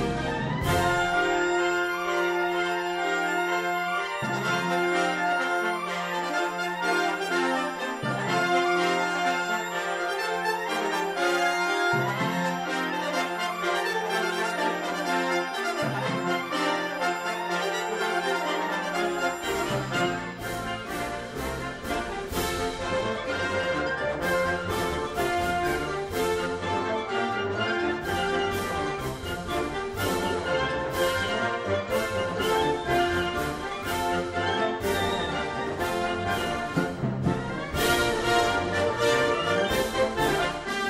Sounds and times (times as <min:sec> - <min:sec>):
Music: 0:00.0 - 0:40.9.